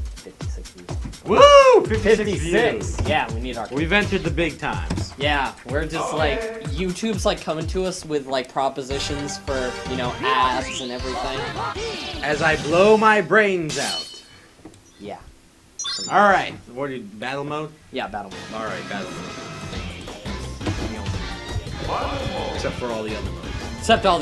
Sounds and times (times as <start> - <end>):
Video game music: 0.0 - 13.1, 15.8 - 16.5
Speech: 0.2 - 11.5, 16.1 - 19.2, 23.8 - 24.2.